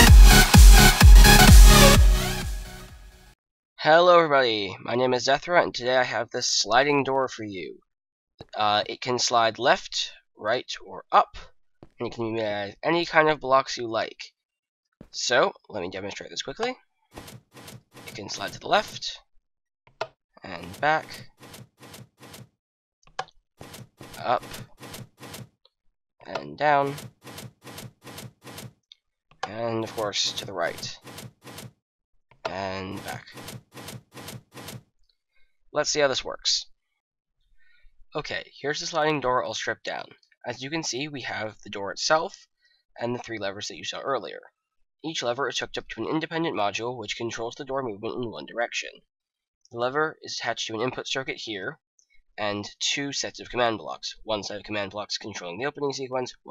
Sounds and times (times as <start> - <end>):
Speech: 3.8 - 7.8, 8.4 - 14.3, 15.1 - 16.8, 18.2 - 19.2, 20.4 - 21.2, 24.2 - 24.6, 26.2 - 27.0, 29.4 - 31.0, 32.5 - 33.4, 35.8 - 36.7, 38.2 - 42.4, 43.0 - 49.0, 49.8 - 51.8, 52.4 - 56.5.